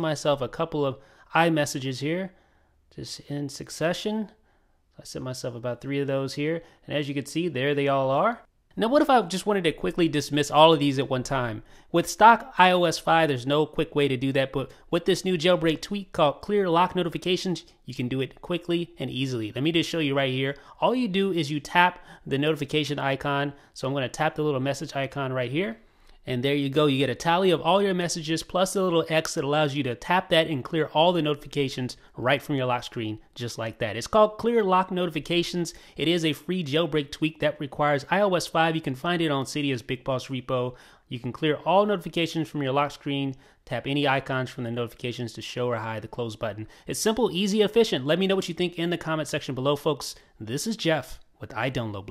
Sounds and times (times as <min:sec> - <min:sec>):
Speech: 0:00.0 - 0:04.4, 0:05.0 - 0:52.1
Inside, small room: 0:00.0 - 0:52.1.